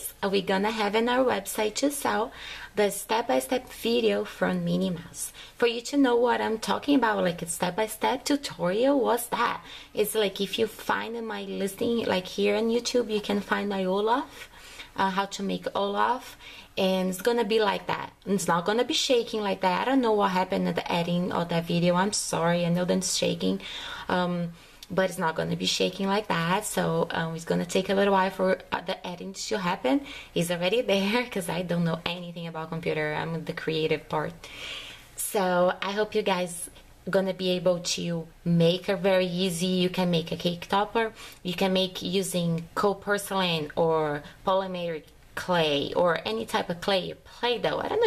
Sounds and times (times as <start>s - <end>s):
Speech: 0.0s - 34.4s, 35.2s - 48.0s.